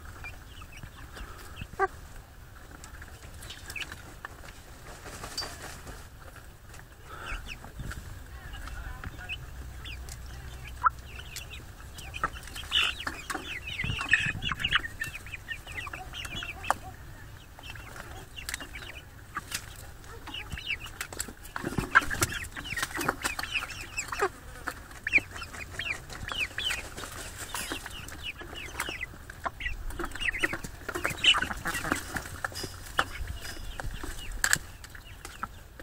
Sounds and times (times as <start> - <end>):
Bird: 0.0 - 2.0, 2.6 - 35.8
Chicken, rooster: 0.0 - 35.8.